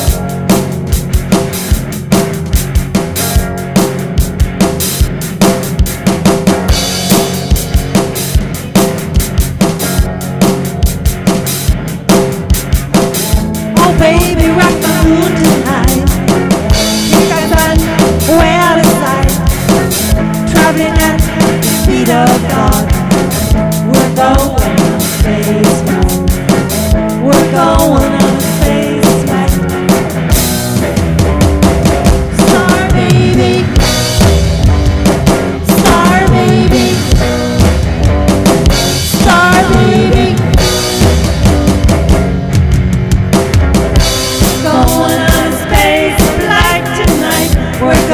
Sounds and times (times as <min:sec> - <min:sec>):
Music: 0:00.0 - 0:48.1.